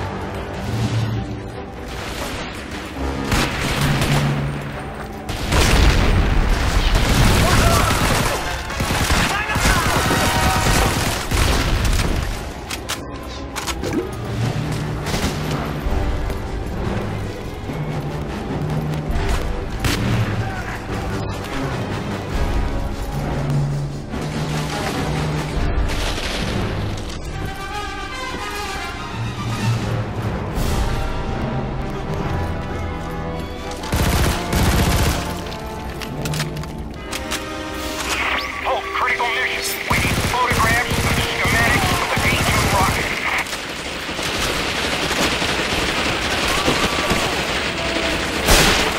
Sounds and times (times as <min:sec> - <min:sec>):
Music: 0:00.0 - 0:48.9.